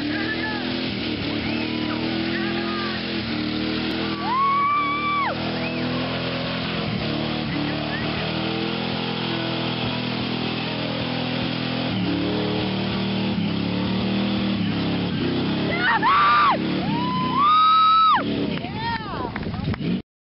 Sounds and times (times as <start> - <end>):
Vehicle: 0.0 - 20.0.